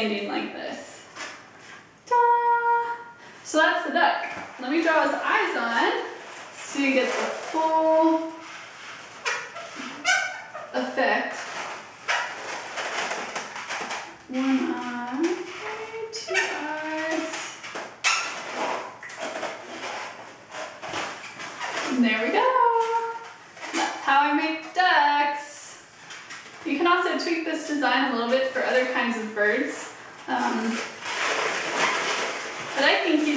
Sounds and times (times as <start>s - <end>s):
Speech: 0.0s - 1.1s, 2.1s - 8.4s, 10.8s - 11.5s, 14.3s - 17.6s, 21.9s - 25.8s, 26.6s - 30.9s, 32.7s - 33.3s
Inside, small room: 0.0s - 33.3s.